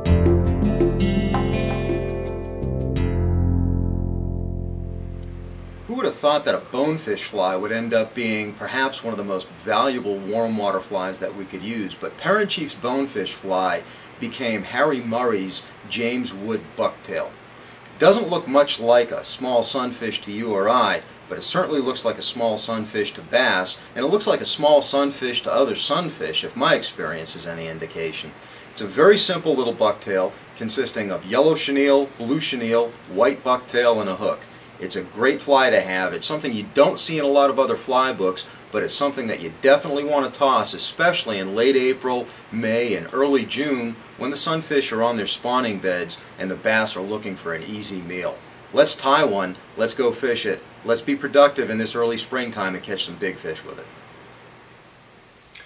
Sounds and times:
Speech: 5.9s - 17.4s, 18.0s - 54.0s.

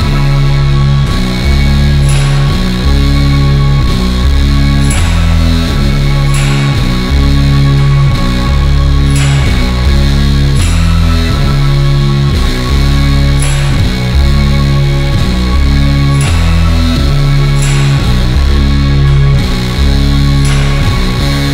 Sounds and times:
Distortion: 0.0s - 21.5s
Progressive rock: 0.0s - 21.5s.

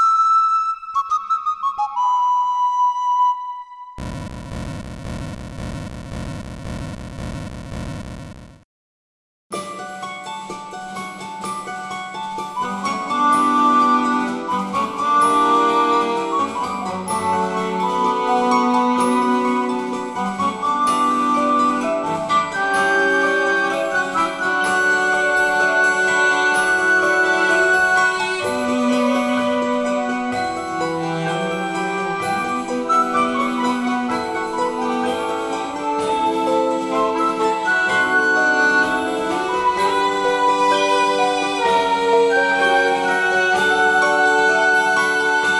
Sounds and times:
Music: 0.0s - 4.0s, 9.5s - 45.5s.

